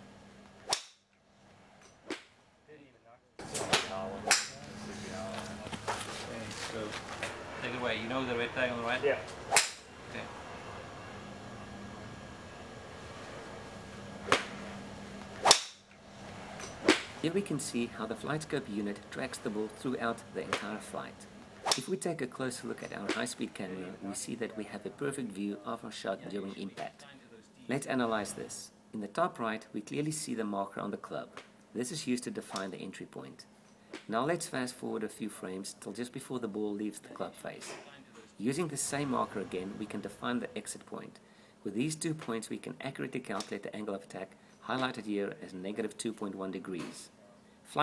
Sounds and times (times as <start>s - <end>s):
Speech: 2.7s - 7.0s, 7.6s - 9.3s, 17.2s - 33.5s, 34.1s - 47.8s.